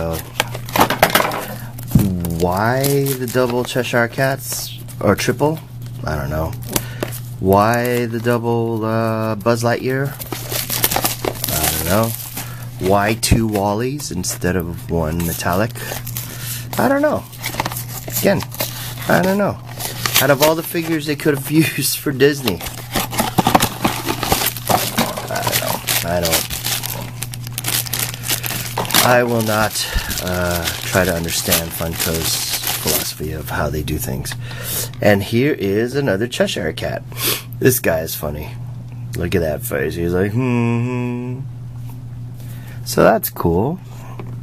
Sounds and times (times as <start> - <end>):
Narration, monologue: 0.0 - 40.6.